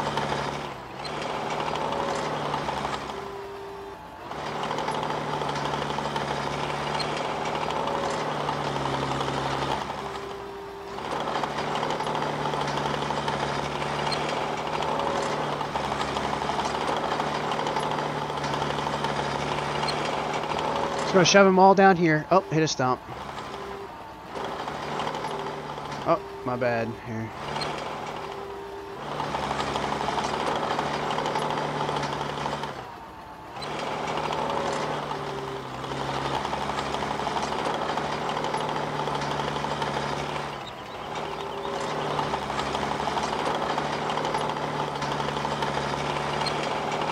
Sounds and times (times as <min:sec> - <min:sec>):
Lawn mower: 0:00.0 - 0:47.1
Vehicle: 0:00.0 - 0:47.1
Speech: 0:21.1 - 0:23.0, 0:26.1 - 0:27.3.